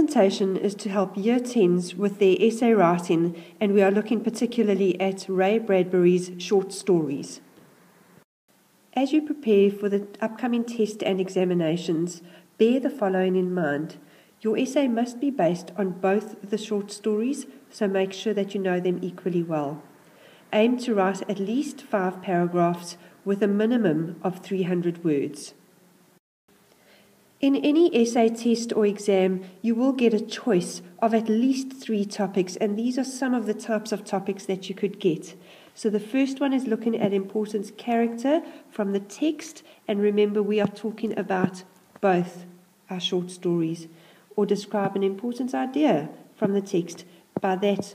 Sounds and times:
Speech: 0.0 - 7.4, 8.9 - 19.8, 20.5 - 25.6, 27.4 - 47.9.

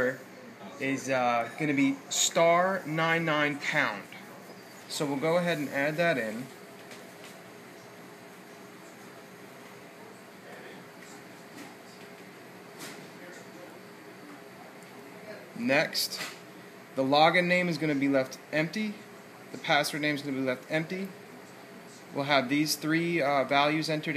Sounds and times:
Speech: 0.0 - 6.6, 13.1 - 16.4, 17.0 - 24.1.

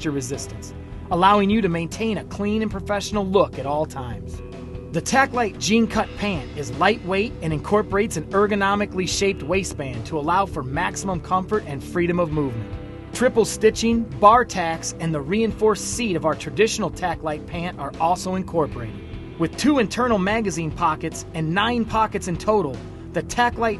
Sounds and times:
Music: 0.0 - 23.7
Speech: 0.0 - 23.7.

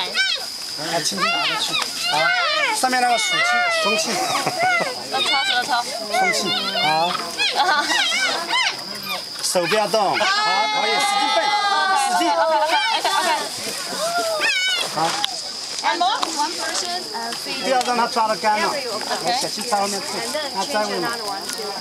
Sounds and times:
Animal: 0.0 - 12.0, 13.7 - 15.5
Outside, rural or natural: 0.0 - 21.8.

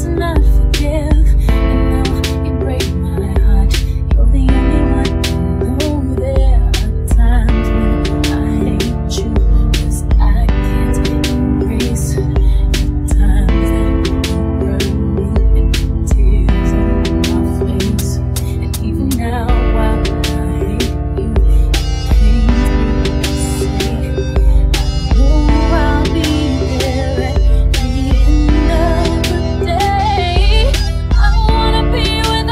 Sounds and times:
Music: 0.0 - 32.5.

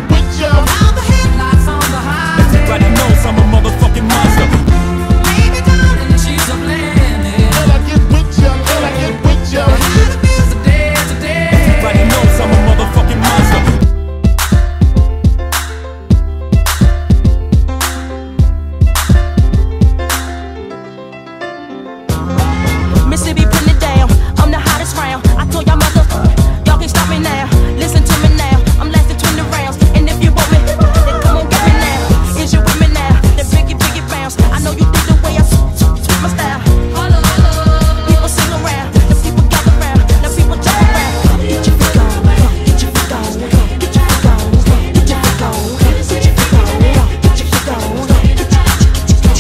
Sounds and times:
Exciting music: 0.0 - 20.6, 22.0 - 49.4.

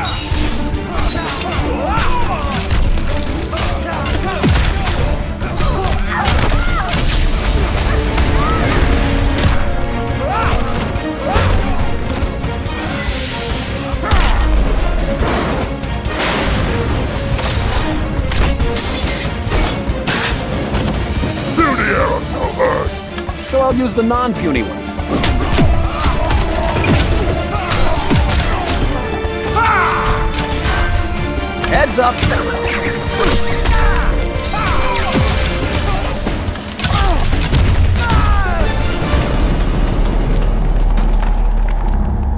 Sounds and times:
Music: 0.0 - 42.3.

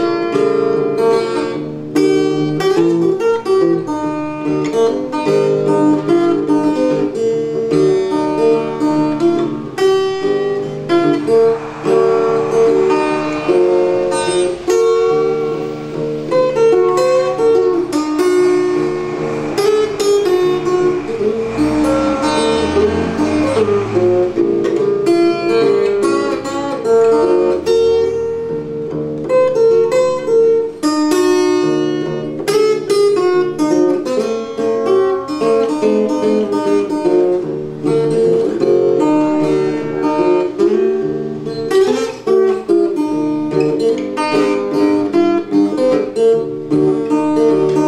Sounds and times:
Guitar: 0.0 - 47.8.

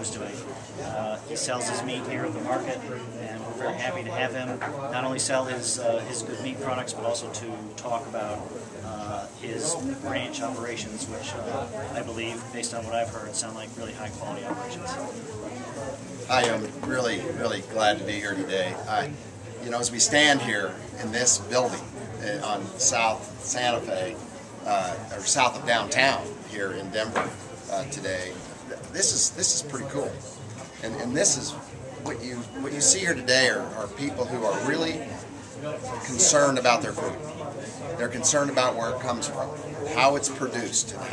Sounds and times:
Speech: 0.0 - 41.1.

